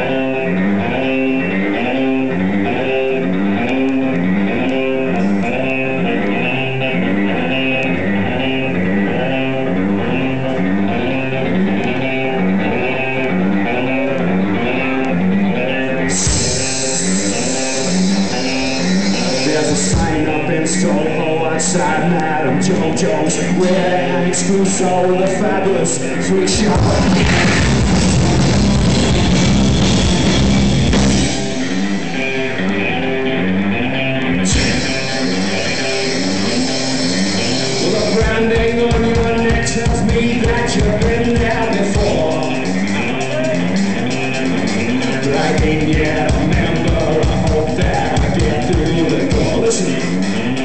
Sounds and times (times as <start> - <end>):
Music: 0.0 - 50.6.